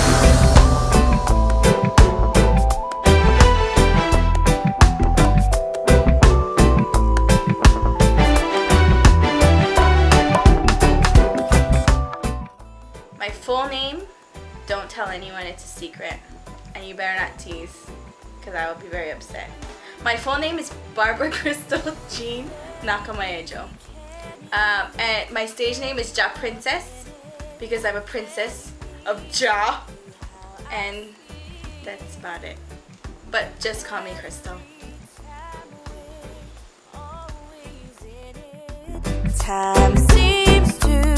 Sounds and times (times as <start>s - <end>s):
Music: 0.0s - 41.1s
Speech: 13.2s - 14.1s, 14.7s - 17.8s, 18.4s - 32.6s, 33.3s - 34.7s.